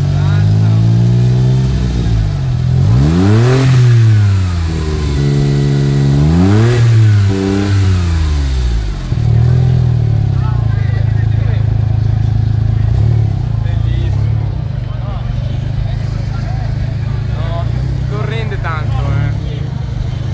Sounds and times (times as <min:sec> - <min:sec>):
Crowd: 0:00.0 - 0:20.3.